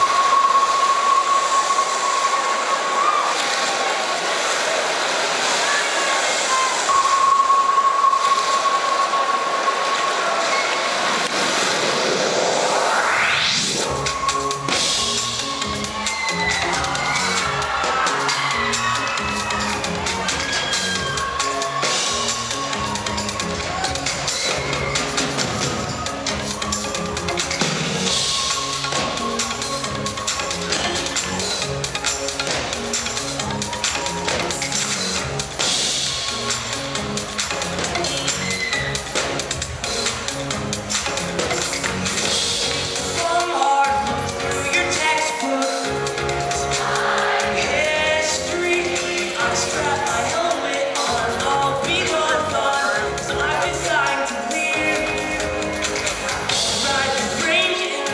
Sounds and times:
Music: 0.0s - 4.6s, 5.4s - 10.3s, 10.9s - 58.1s
Inside, large room or hall: 0.0s - 58.1s.

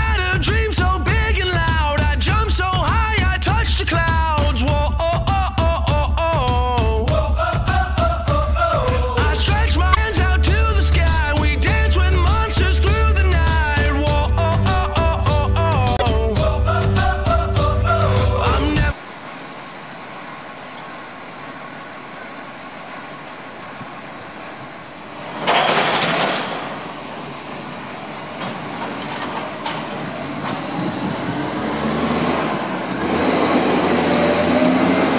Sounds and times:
Truck: 0.0s - 35.1s
Music: 0.1s - 19.0s.

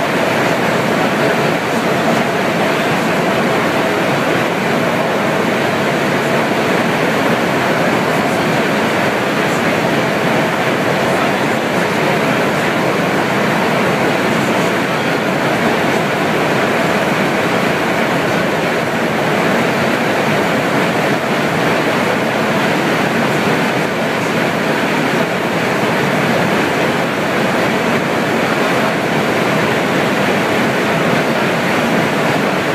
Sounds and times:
Subway, metro, underground: 0.0s - 32.7s
Train: 0.0s - 32.7s.

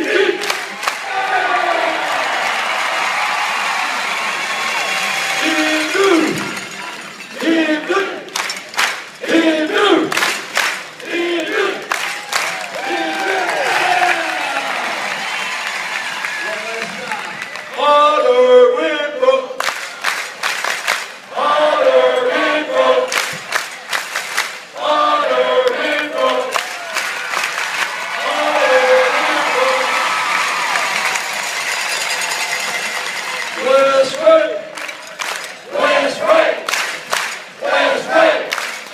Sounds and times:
Cheering: 0.0s - 38.9s
Crowd: 0.0s - 38.9s.

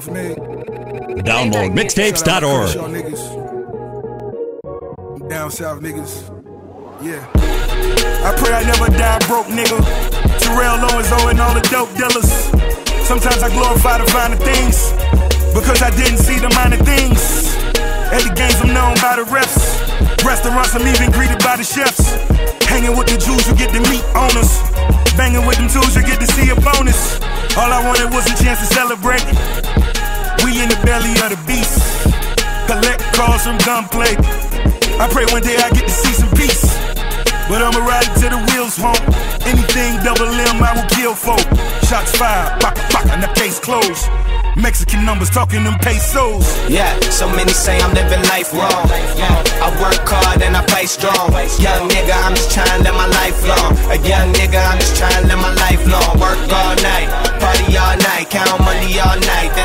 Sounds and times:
Rhythm and blues: 0.0s - 3.2s, 7.0s - 59.6s.

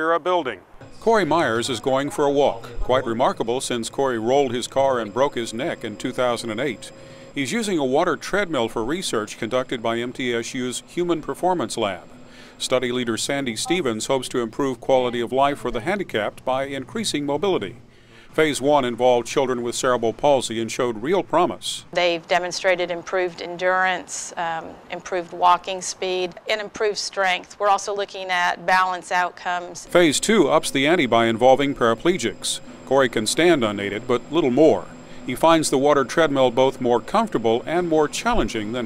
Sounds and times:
Speech: 0.0s - 12.0s, 12.6s - 17.8s, 18.4s - 38.8s.

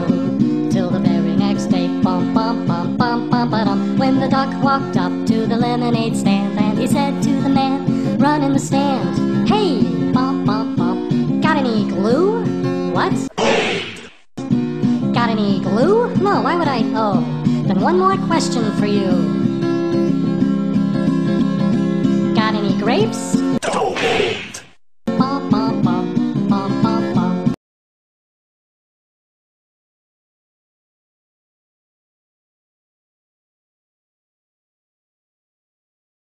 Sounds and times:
Music: 0.0s - 13.8s, 14.4s - 23.6s, 25.1s - 27.6s
Speech: 13.0s - 14.1s, 15.2s - 19.3s, 22.4s - 24.7s.

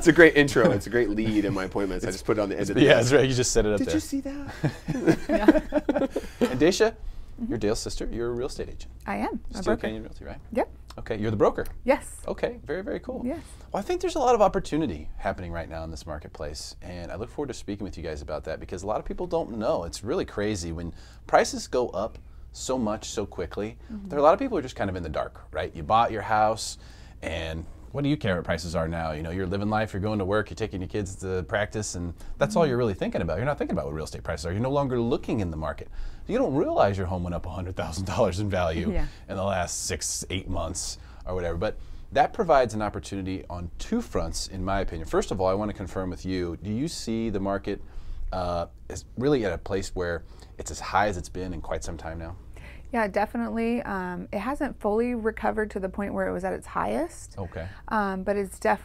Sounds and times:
Speech: 0.0s - 4.5s, 6.4s - 11.6s, 12.3s - 47.8s, 48.4s - 52.4s, 56.8s - 58.2s.

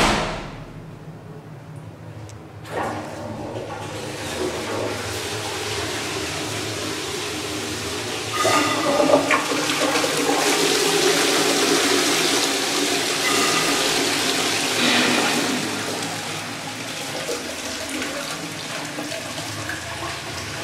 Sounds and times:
Toilet flush: 2.6s - 20.6s.

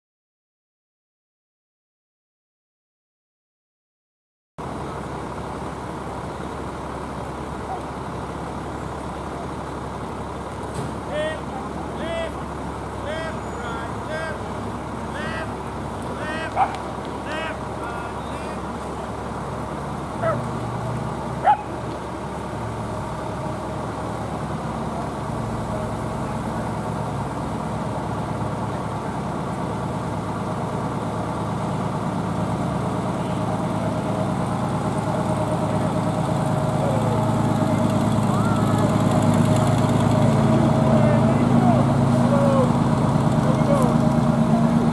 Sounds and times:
Truck: 4.6s - 44.9s.

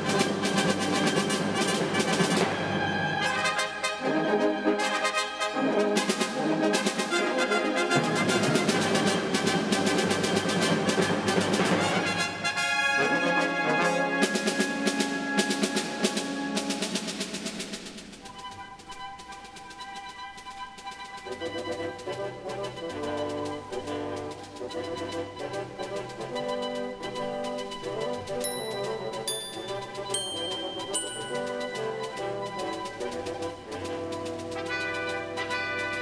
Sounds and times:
Music: 0.0s - 36.0s.

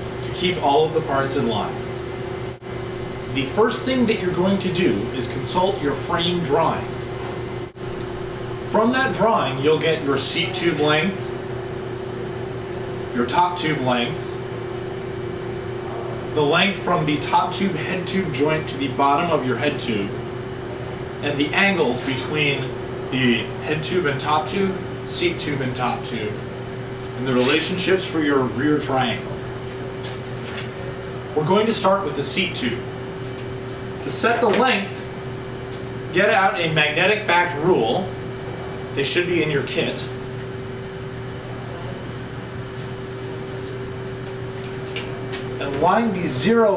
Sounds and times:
Speech: 0.2s - 1.8s, 3.3s - 6.9s, 8.7s - 11.3s, 13.1s - 14.4s, 15.9s - 20.2s, 21.2s - 26.5s, 27.2s - 29.4s, 31.4s - 32.9s, 34.0s - 35.1s, 36.1s - 38.1s, 39.0s - 40.2s, 45.6s - 46.7s.

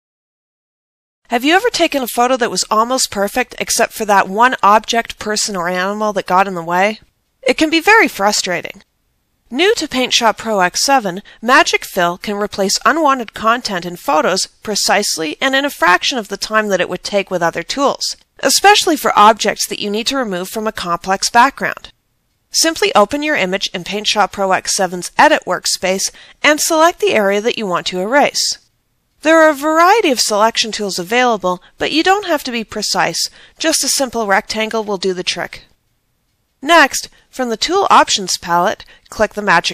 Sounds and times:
Speech: 1.3s - 8.8s, 9.5s - 21.9s, 22.6s - 35.7s, 36.6s - 39.7s.

